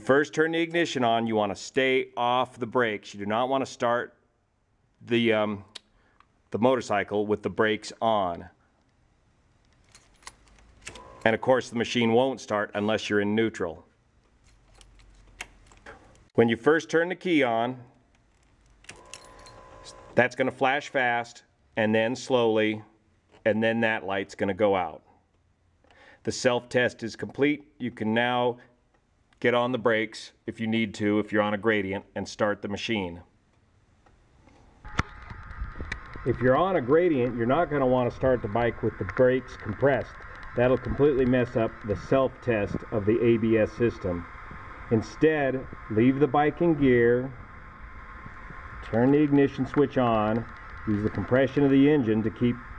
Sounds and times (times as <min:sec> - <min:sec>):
Speech: 0:00.0 - 0:04.2, 0:05.0 - 0:05.8, 0:06.5 - 0:08.6, 0:11.2 - 0:13.9, 0:16.4 - 0:17.9, 0:20.2 - 0:25.1, 0:26.2 - 0:28.6, 0:29.4 - 0:33.3, 0:36.3 - 0:44.3, 0:44.9 - 0:47.4, 0:48.8 - 0:52.6.